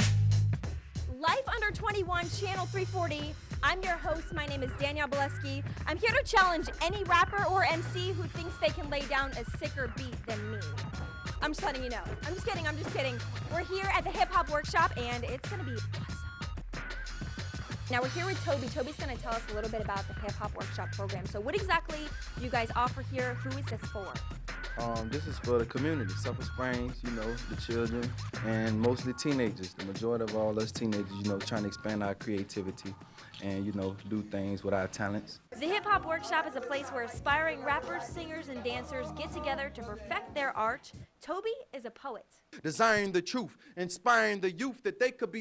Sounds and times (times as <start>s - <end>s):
Music: 0.0s - 41.1s
Speech: 24.8s - 41.7s.